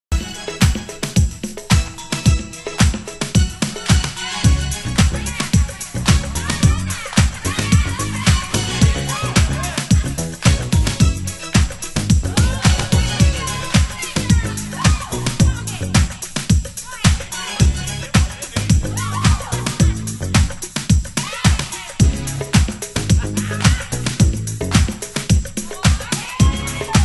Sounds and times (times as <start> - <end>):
Disco: 0.1 - 27.0.